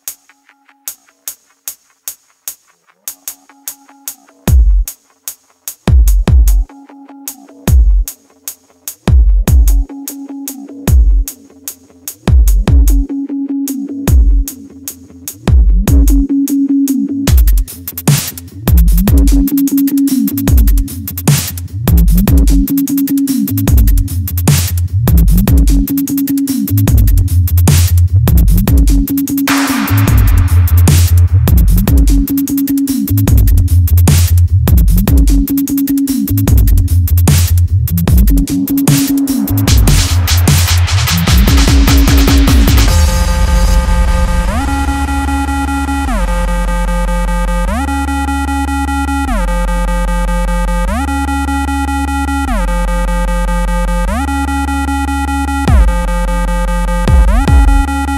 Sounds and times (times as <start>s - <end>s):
Dubstep: 0.9s - 58.1s.